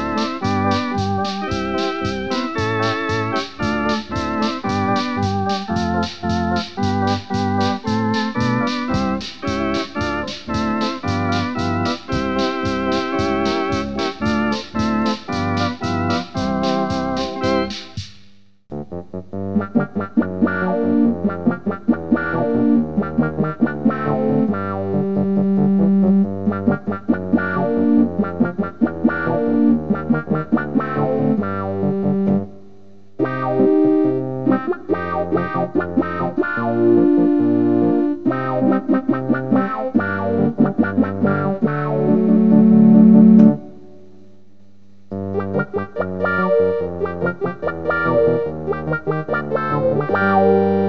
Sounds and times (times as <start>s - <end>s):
Hammond organ: 0.0s - 18.1s, 18.8s - 44.4s, 45.0s - 50.8s.